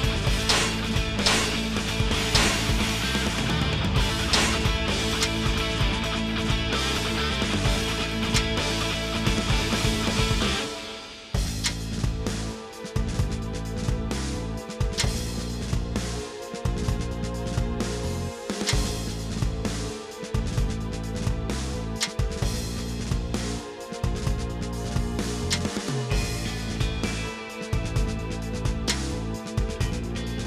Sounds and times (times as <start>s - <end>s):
Music: 0.0s - 30.4s.